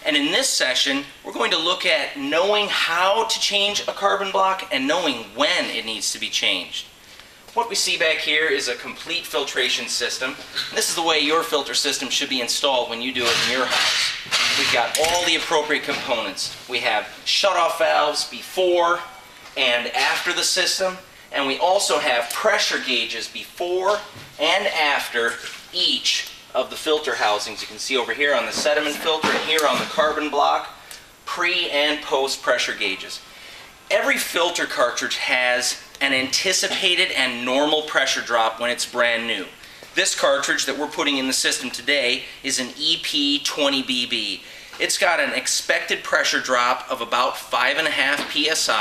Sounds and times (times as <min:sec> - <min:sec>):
Speech: 0:00.0 - 0:06.9, 0:07.5 - 0:33.2, 0:33.9 - 0:48.8.